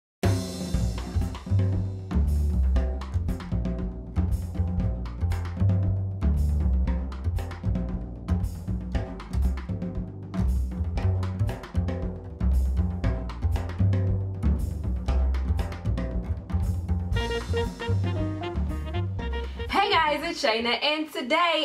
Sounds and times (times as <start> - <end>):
Drum roll: 0.2 - 20.4.